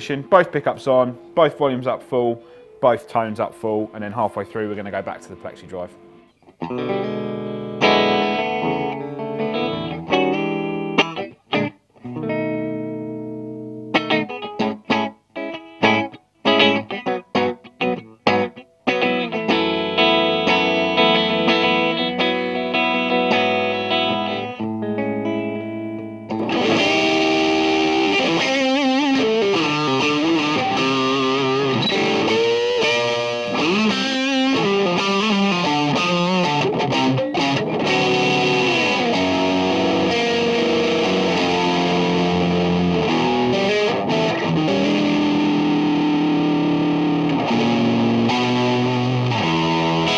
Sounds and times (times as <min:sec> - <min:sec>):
Guitar: 0:00.0 - 0:50.1
Inside, small room: 0:00.0 - 0:50.1.